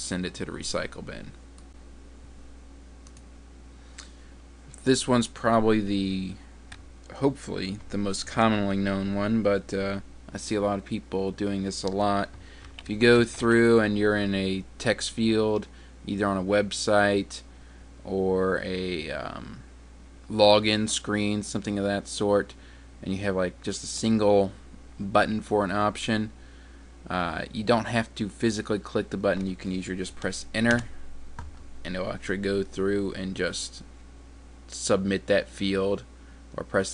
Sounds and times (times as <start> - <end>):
Speech: 0.0 - 1.4, 4.8 - 6.4, 7.1 - 19.7, 20.3 - 26.4, 27.1 - 30.9, 31.8 - 33.9, 34.7 - 36.9.